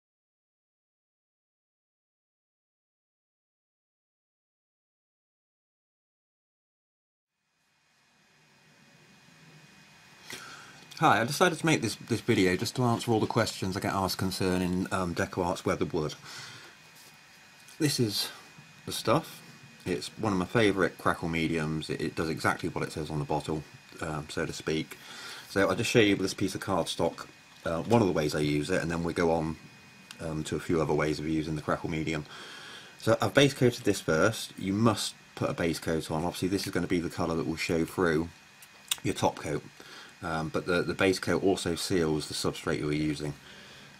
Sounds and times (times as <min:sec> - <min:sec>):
Speech: 0:11.0 - 0:16.2, 0:17.8 - 0:32.3, 0:33.0 - 0:43.4.